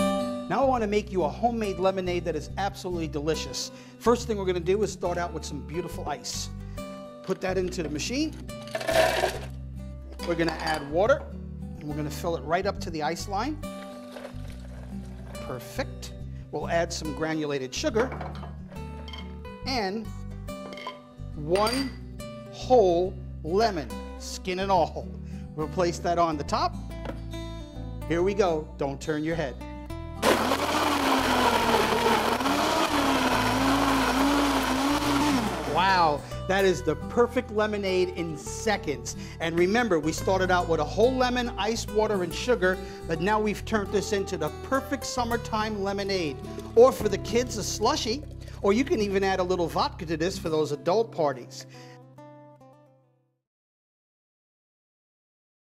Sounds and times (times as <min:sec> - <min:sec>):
Music: 0:00.0 - 0:53.4
Speech: 0:00.5 - 0:06.5, 0:07.3 - 0:08.4, 0:10.2 - 0:11.2, 0:11.8 - 0:13.6, 0:15.5 - 0:15.9, 0:16.6 - 0:18.1, 0:19.7 - 0:20.1, 0:21.4 - 0:21.9, 0:22.6 - 0:25.0, 0:25.6 - 0:26.7, 0:28.1 - 0:29.6, 0:35.7 - 0:51.7
Blender: 0:08.7 - 0:09.5, 0:14.1 - 0:15.4, 0:30.2 - 0:36.1.